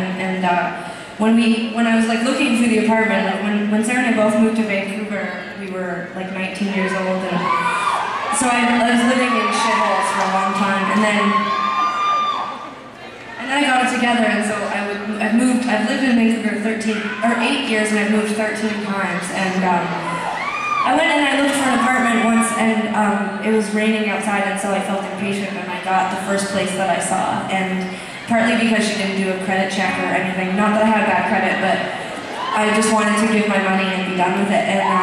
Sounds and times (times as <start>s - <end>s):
Speech: 0.0s - 7.7s, 8.4s - 11.4s, 13.3s - 20.1s, 20.9s - 35.0s.